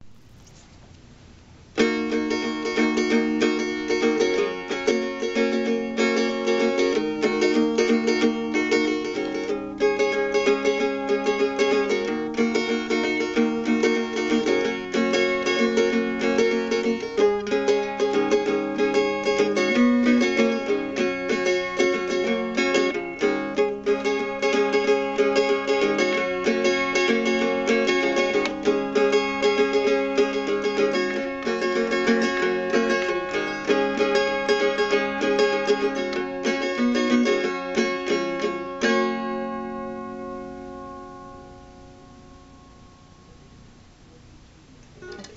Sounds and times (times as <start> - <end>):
Strum: 0.0 - 45.3.